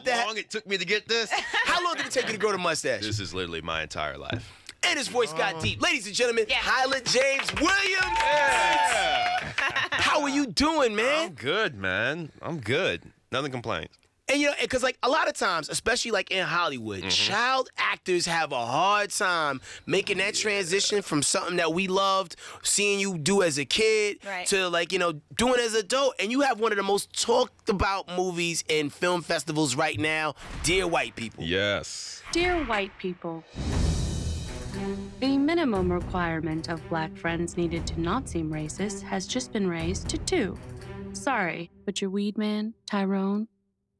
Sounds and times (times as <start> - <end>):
Speech: 0.0 - 8.1, 10.0 - 33.4.